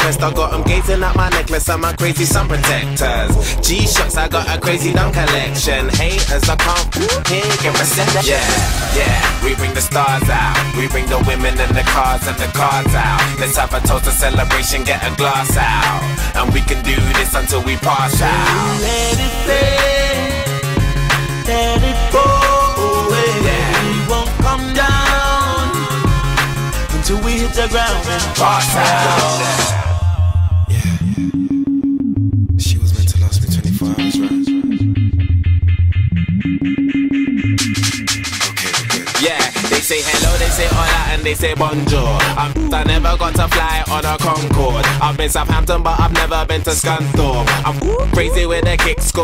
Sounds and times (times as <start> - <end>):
Drum and bass: 0.0 - 49.2.